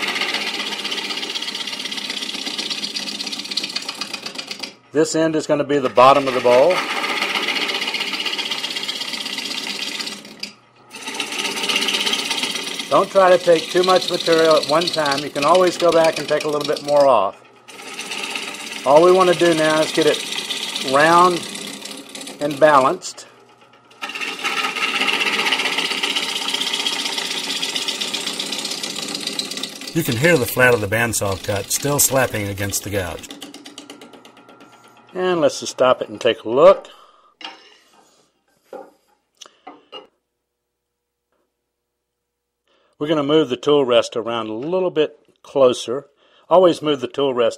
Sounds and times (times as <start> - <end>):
Speech: 5.0 - 6.8, 12.9 - 17.4, 18.9 - 20.2, 20.8 - 21.4, 22.4 - 23.3, 30.0 - 33.3, 35.2 - 36.9, 43.0 - 47.5.